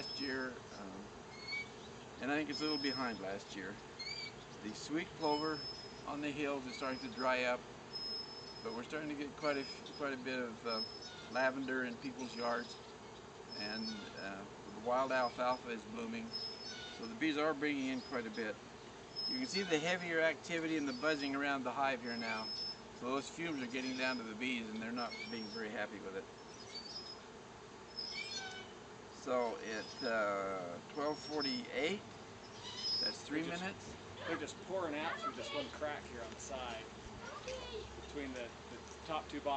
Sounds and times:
Bee, wasp, etc.: 0.0 - 39.5
Fly, housefly: 0.0 - 39.5.

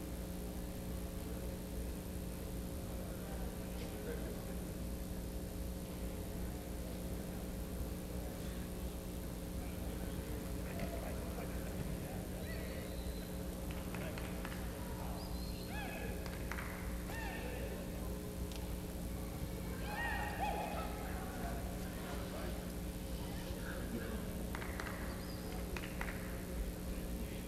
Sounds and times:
Speech: 2.9 - 4.9, 6.0 - 16.2, 19.2 - 24.5.

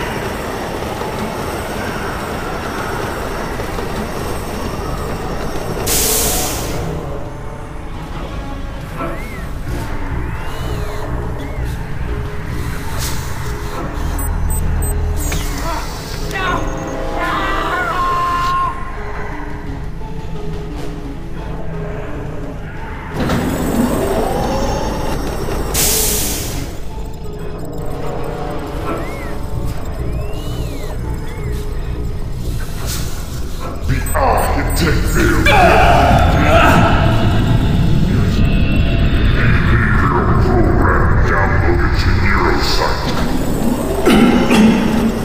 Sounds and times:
Music: 0.0 - 45.2.

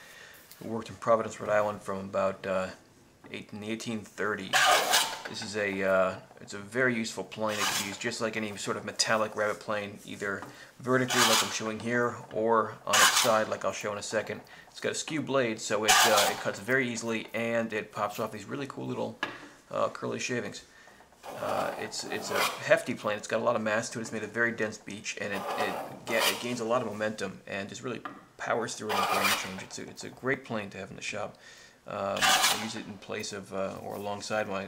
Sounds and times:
Speech: 0.6 - 4.6, 5.3 - 20.7, 21.3 - 34.6.

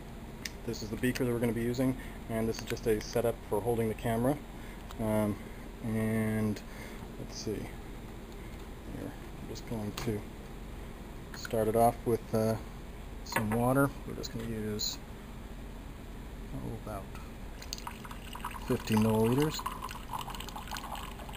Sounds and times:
Speech: 0.6 - 4.4, 5.0 - 6.6, 7.2 - 7.8, 8.9 - 10.3, 11.4 - 12.6, 13.3 - 15.0, 16.5 - 17.2, 18.6 - 19.7.

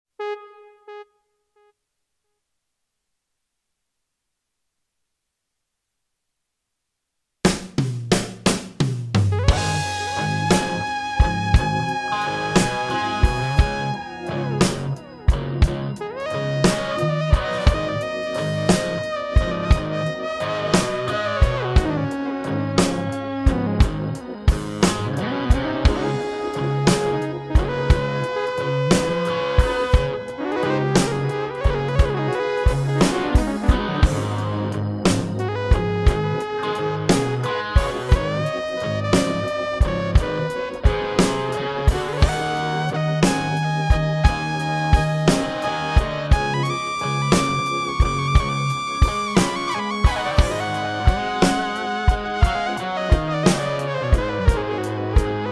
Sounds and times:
Music: 0.2 - 2.4, 7.4 - 55.5.

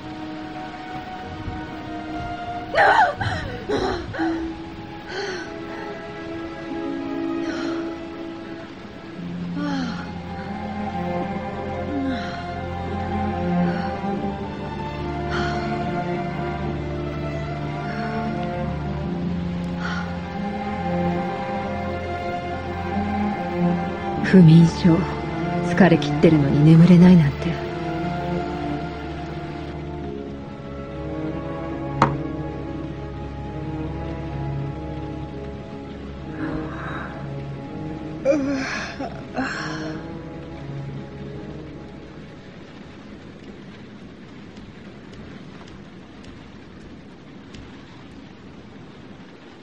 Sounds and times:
Music: 0.0 - 47.6.

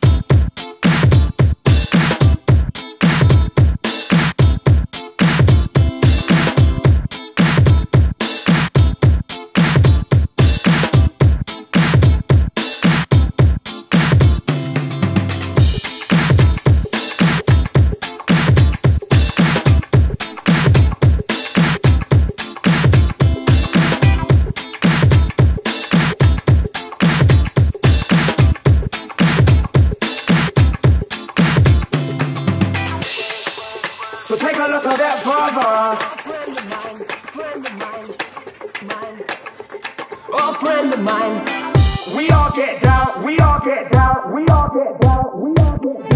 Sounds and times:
Music: 0.0 - 46.1.

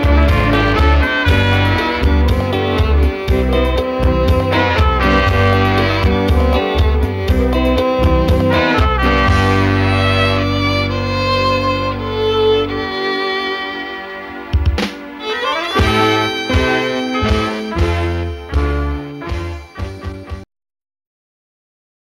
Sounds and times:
Violin, fiddle: 0.0 - 20.0.

